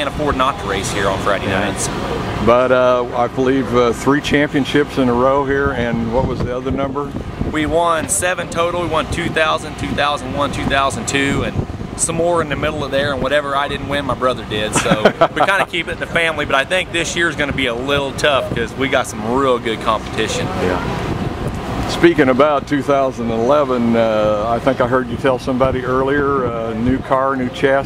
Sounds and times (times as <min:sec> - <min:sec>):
Speech: 0:00.0 - 0:20.9, 0:21.9 - 0:27.8
Vehicle: 0:00.0 - 0:27.8.